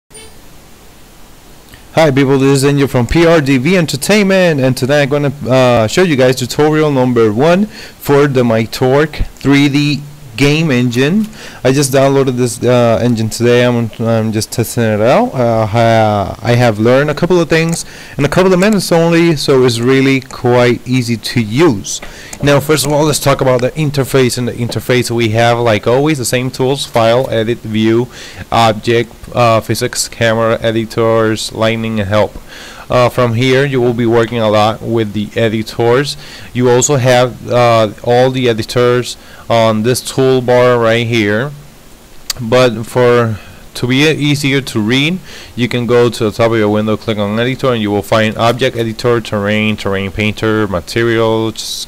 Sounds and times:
Pink noise: 0.1s - 51.8s
Speech: 1.9s - 41.6s, 42.3s - 51.8s.

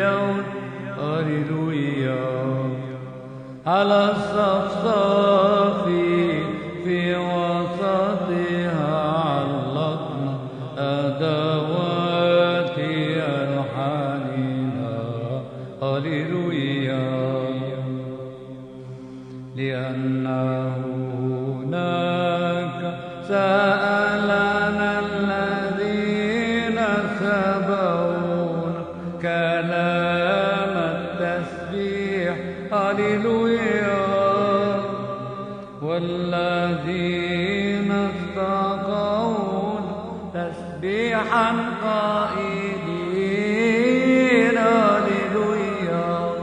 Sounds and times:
Male singing: 0.0s - 18.6s, 19.5s - 46.4s.

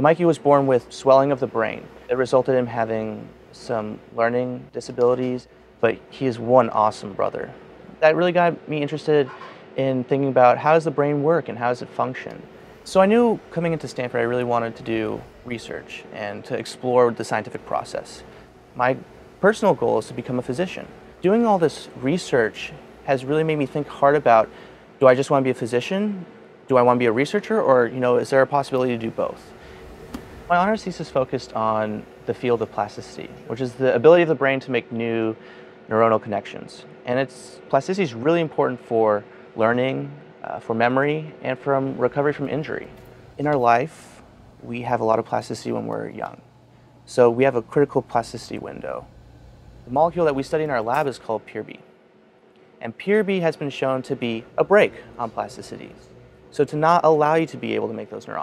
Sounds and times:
Speech: 0.0s - 29.6s, 30.5s - 46.4s, 47.1s - 49.1s, 49.9s - 51.9s, 52.8s - 58.4s.

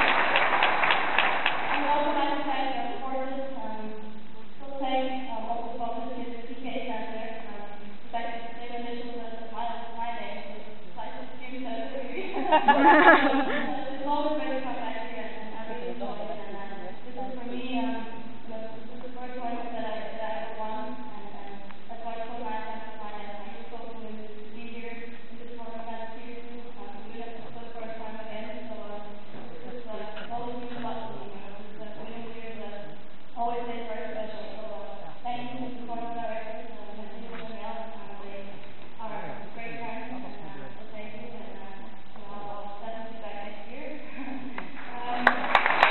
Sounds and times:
Female speech, woman speaking: 1.8s - 45.6s.

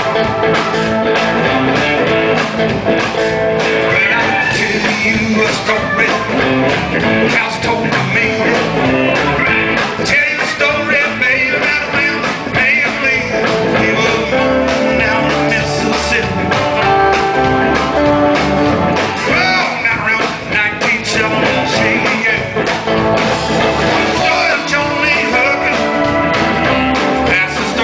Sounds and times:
Acoustic guitar: 0.0s - 27.8s
Bass guitar: 0.0s - 27.8s
Blues: 0.0s - 27.8s
Electric guitar: 0.0s - 27.8s.

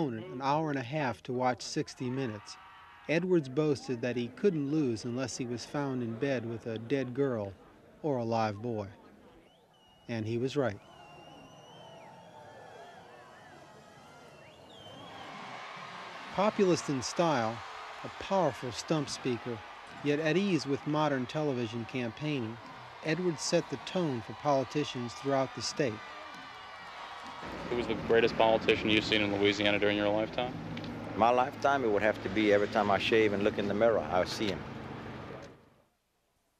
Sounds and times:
Speech: 0.0s - 9.0s, 10.1s - 10.8s, 16.4s - 26.0s, 27.7s - 30.5s, 31.2s - 34.6s
Outside, urban or manmade: 25.1s - 36.0s.

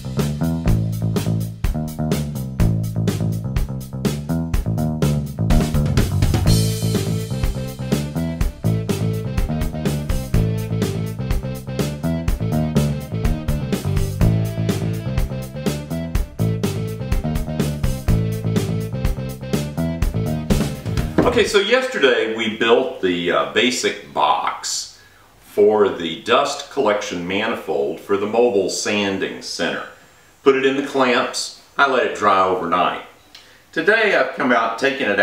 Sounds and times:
Music: 0.0s - 21.5s
Speech: 21.2s - 35.2s.

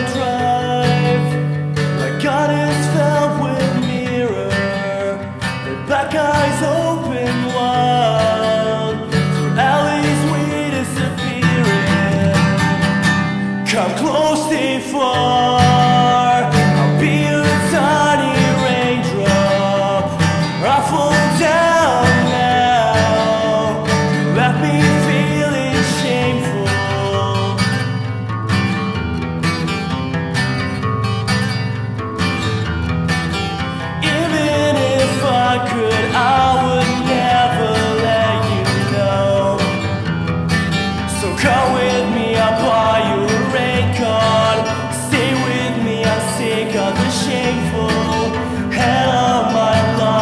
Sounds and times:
Country: 0.0s - 50.2s.

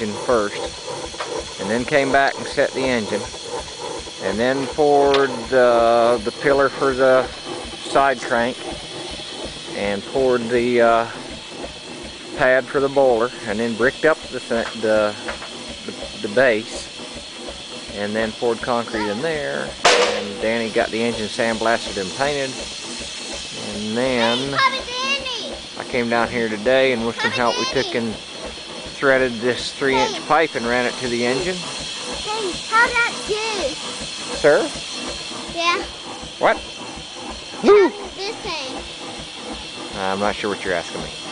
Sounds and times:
Engine: 0.0s - 41.3s.

